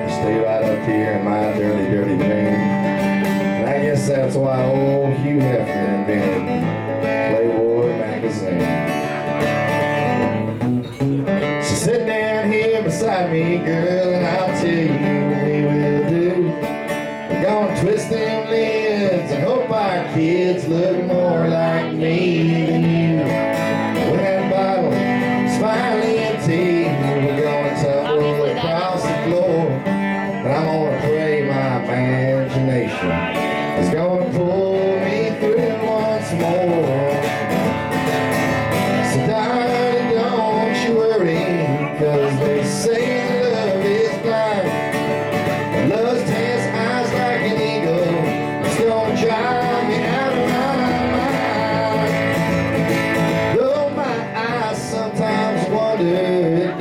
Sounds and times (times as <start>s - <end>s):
Speech: 0.0s - 2.6s, 3.6s - 6.5s, 7.3s - 8.8s, 26.4s - 29.8s, 30.4s - 34.5s, 40.4s - 43.6s
Country: 0.0s - 56.8s
Guitar: 0.0s - 56.8s
Singing: 17.3s - 37.4s, 38.9s - 45.1s, 45.7s - 52.8s, 53.4s - 56.8s.